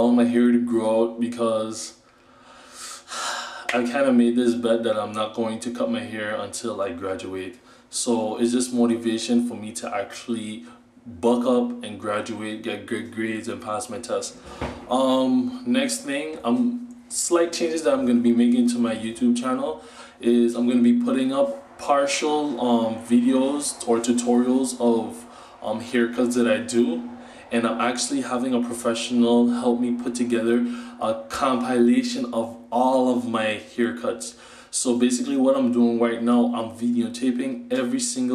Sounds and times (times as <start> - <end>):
Speech: 0.0 - 2.0, 3.7 - 38.3.